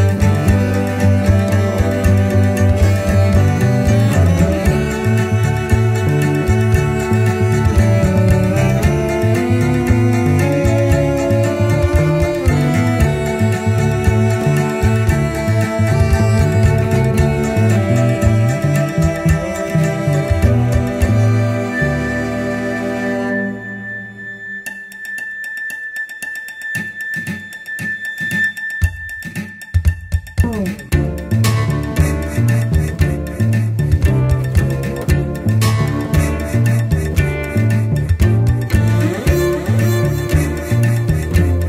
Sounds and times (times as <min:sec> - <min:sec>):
Classical music: 0:00.0 - 0:24.2, 0:34.1 - 0:41.6
Cello: 0:00.0 - 0:24.9, 0:30.9 - 0:41.6.